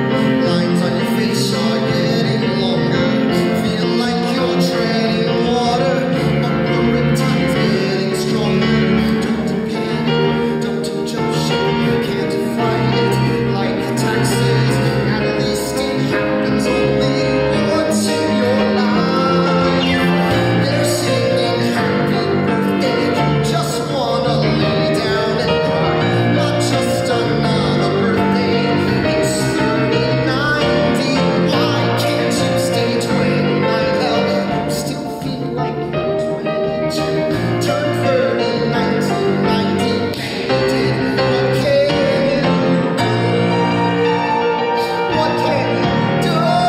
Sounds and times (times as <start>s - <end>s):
Music: 0.0s - 46.6s.